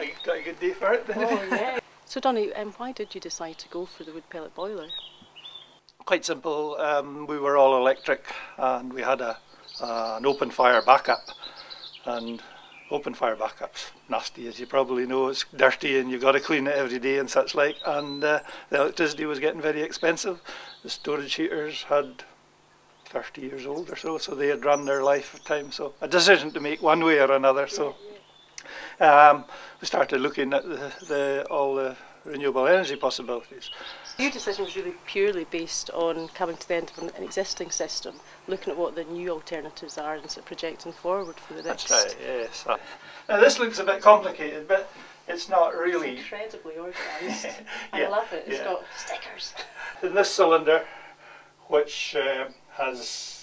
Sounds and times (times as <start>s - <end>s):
Speech: 0.0s - 4.9s, 6.0s - 11.2s, 12.1s - 22.3s, 23.1s - 28.2s, 29.0s - 50.9s, 51.7s - 53.4s.